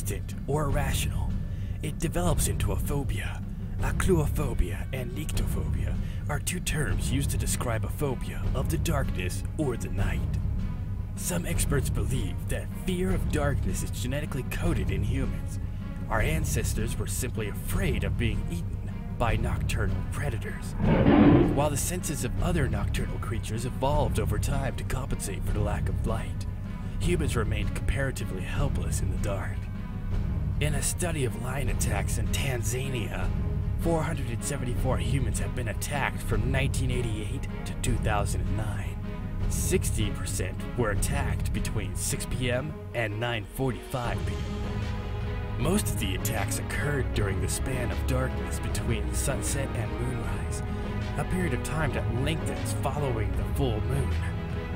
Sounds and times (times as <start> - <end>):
Speech: 0.0 - 10.4, 11.2 - 29.7, 30.6 - 44.5, 45.6 - 54.4
Music: 0.0 - 54.7.